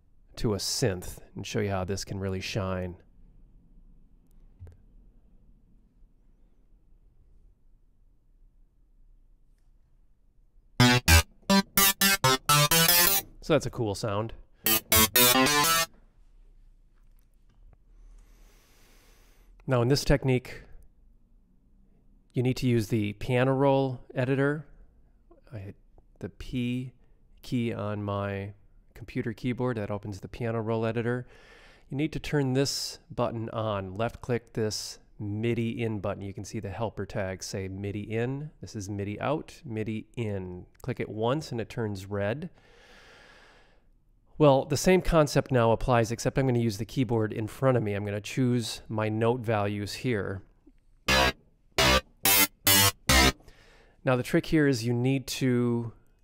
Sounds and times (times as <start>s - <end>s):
Inside, small room: 0.0s - 56.2s
Speech: 0.4s - 3.1s, 13.4s - 14.4s, 19.6s - 20.8s, 22.3s - 24.7s, 25.4s - 31.3s, 31.9s - 42.6s, 44.4s - 50.5s, 54.0s - 56.0s.